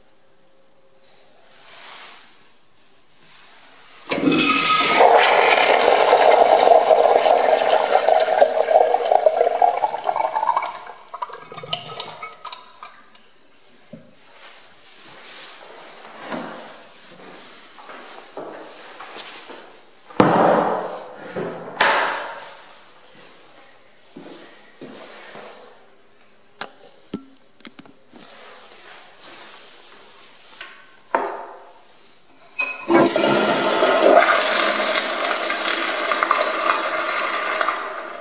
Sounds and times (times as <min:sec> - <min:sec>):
Toilet flush: 0:04.1 - 0:13.2, 0:32.6 - 0:38.2.